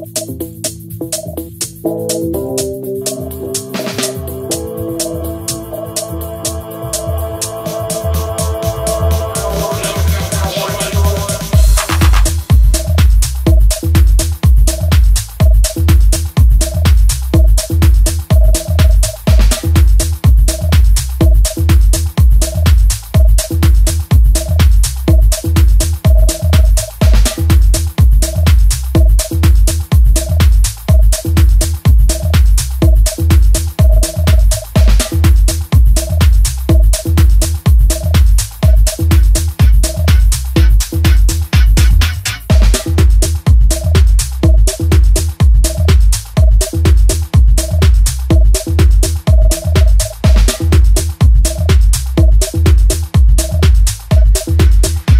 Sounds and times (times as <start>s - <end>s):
Music: 0.0s - 55.1s.